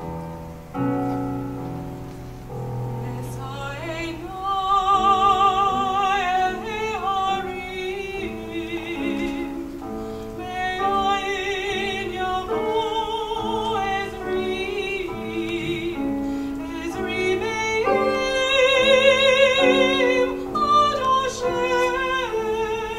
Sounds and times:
Opera: 0.0 - 22.9.

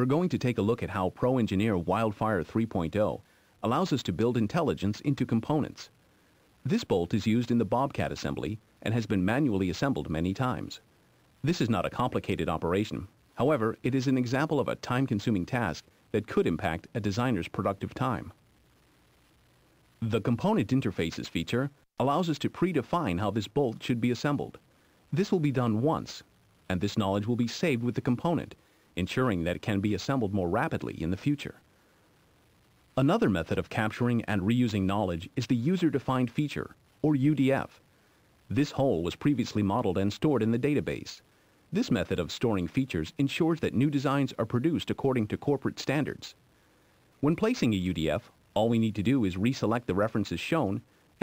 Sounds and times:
Speech: 0.0 - 6.0, 6.6 - 18.4, 20.0 - 31.6, 32.9 - 37.8, 38.5 - 46.4, 47.2 - 51.2.

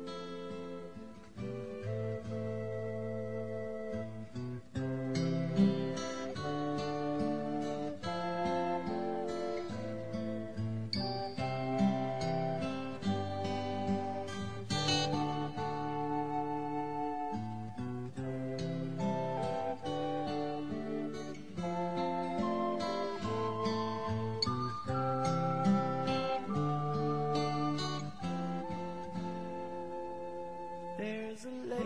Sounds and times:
Music: 0.0 - 31.8.

